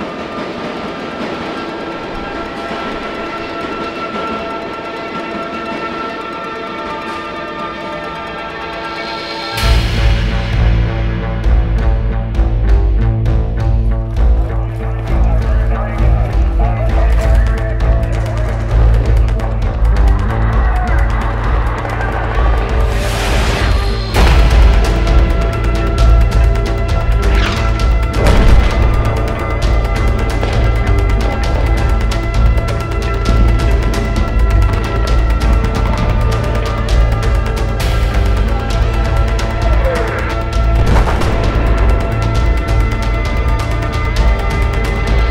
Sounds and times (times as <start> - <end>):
Music: 0.0 - 45.3.